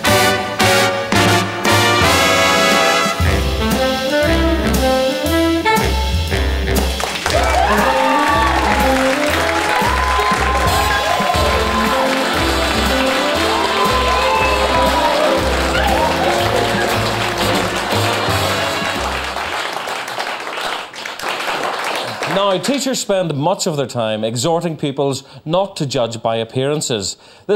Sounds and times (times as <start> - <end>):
Music: 0.0 - 20.0.